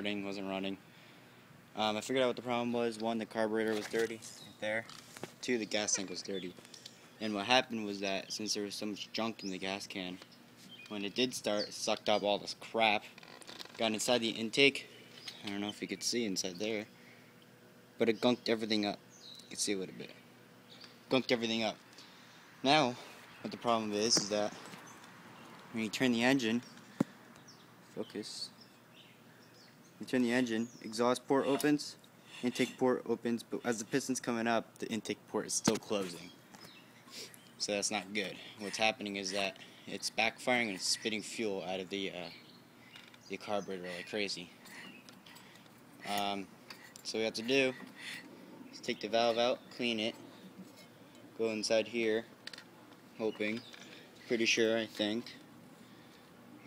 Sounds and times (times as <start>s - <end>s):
Speech: 0.0s - 0.8s, 1.8s - 6.6s, 7.2s - 10.2s, 10.9s - 13.1s, 13.8s - 16.9s, 18.0s - 20.2s, 21.1s - 21.8s, 22.6s - 24.6s, 25.7s - 26.6s, 28.0s - 28.6s, 30.0s - 36.4s, 37.6s - 42.4s, 43.3s - 44.5s, 46.0s - 47.8s, 48.8s - 50.2s, 51.4s - 52.3s, 53.2s - 53.7s, 54.3s - 55.4s.